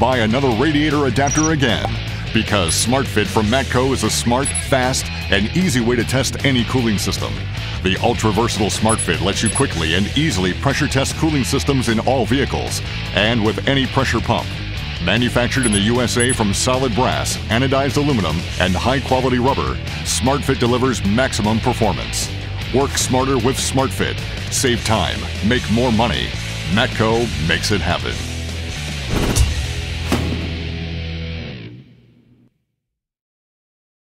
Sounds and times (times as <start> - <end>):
Speech: 0.0 - 28.3
Music: 0.0 - 32.6.